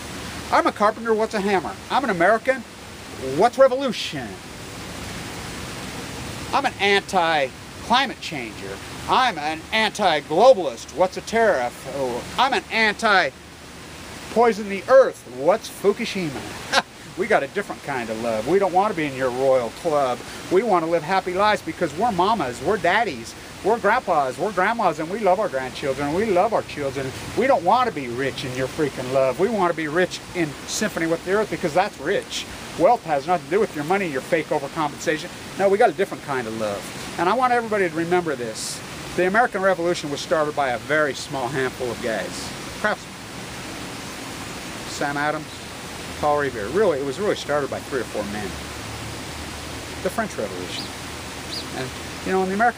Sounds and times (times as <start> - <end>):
Outside, rural or natural: 0.0 - 52.7
Speech: 0.5 - 2.6, 3.2 - 4.4, 6.5 - 13.4, 14.3 - 43.1, 44.9 - 45.6, 46.2 - 48.6, 50.0 - 50.9, 51.6 - 52.7.